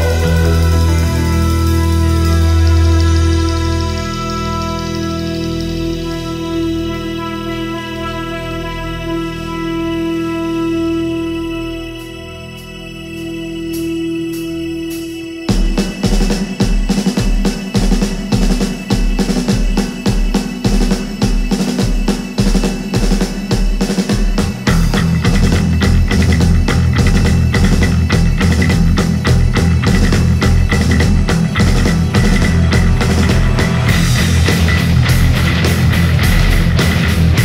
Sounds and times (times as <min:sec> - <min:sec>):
Music: 0:00.0 - 0:37.4.